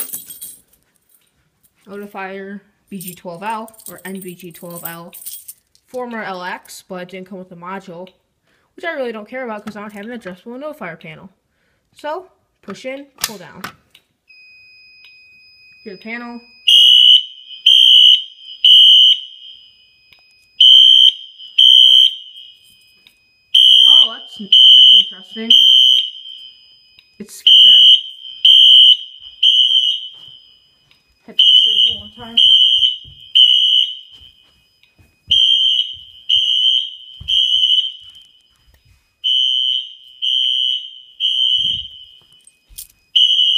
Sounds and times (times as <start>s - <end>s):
Speech: 1.9s - 5.2s, 5.9s - 8.2s, 8.8s - 11.4s, 12.0s - 13.7s, 15.9s - 16.5s, 23.9s - 25.6s, 27.2s - 27.5s, 31.3s - 32.5s
Fire alarm: 14.3s - 43.5s.